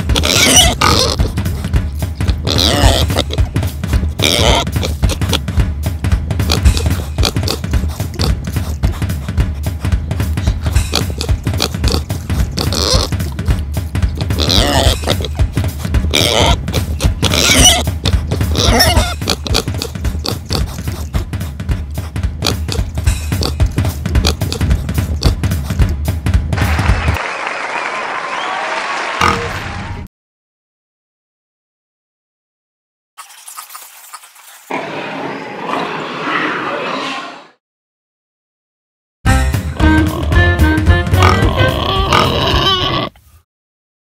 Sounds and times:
Pig: 0.0s - 5.5s, 6.5s - 9.4s, 10.5s - 21.5s, 22.4s - 22.8s, 23.4s - 25.8s, 29.2s - 29.5s, 41.2s - 43.3s
Music: 0.0s - 27.4s, 39.3s - 42.4s.

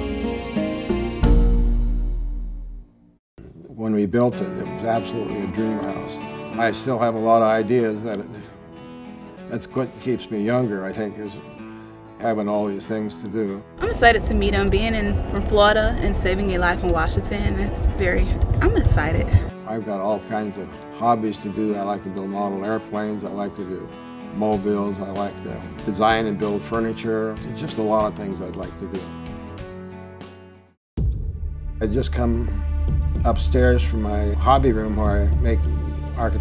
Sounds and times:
Music: 0.0s - 36.4s
Speech: 3.4s - 8.5s, 9.5s - 11.4s, 12.2s - 29.0s, 31.8s - 32.6s, 33.3s - 36.4s.

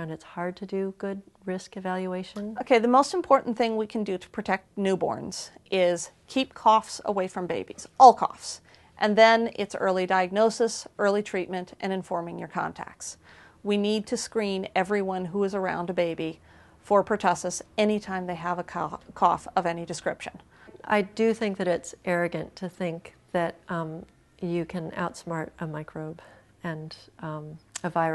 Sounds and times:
Inside, small room: 0.0s - 28.1s
Speech: 0.0s - 28.1s.

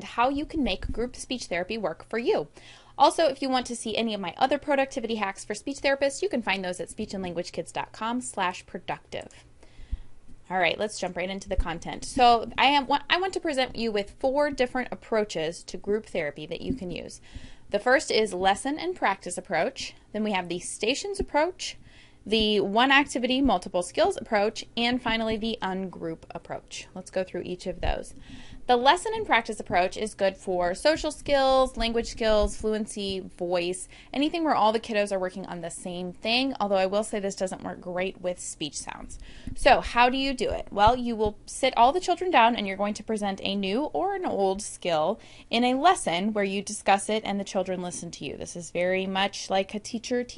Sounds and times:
Female speech, woman speaking: 0.0s - 9.4s, 10.5s - 17.2s, 17.8s - 50.3s
Narration, monologue: 0.0s - 50.3s.

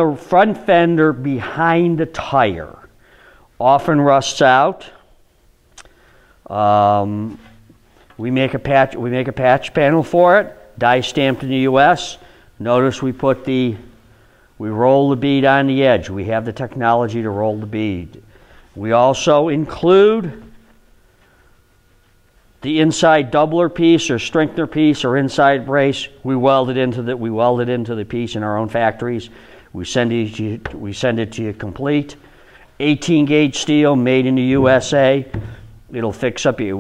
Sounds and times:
Speech: 0.0s - 2.9s, 3.6s - 5.1s, 6.5s - 7.6s, 8.2s - 14.0s, 14.6s - 18.2s, 18.8s - 20.6s, 22.6s - 32.2s, 32.8s - 36.8s.

